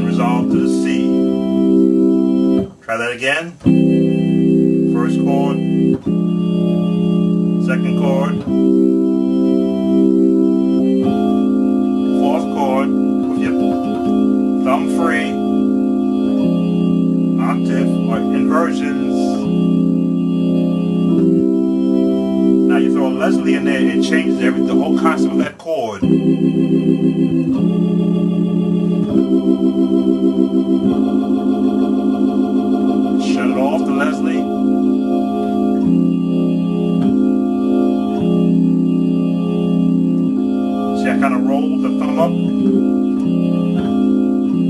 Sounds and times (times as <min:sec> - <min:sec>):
Electric piano: 0:00.0 - 0:44.6
Electronic organ: 0:00.0 - 0:44.6
Hammond organ: 0:00.0 - 0:44.6.